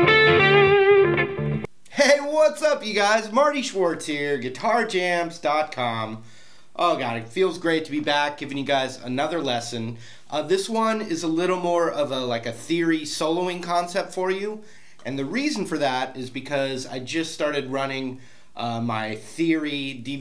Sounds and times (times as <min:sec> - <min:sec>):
Speech: 0:01.9 - 0:06.2, 0:06.8 - 0:20.2.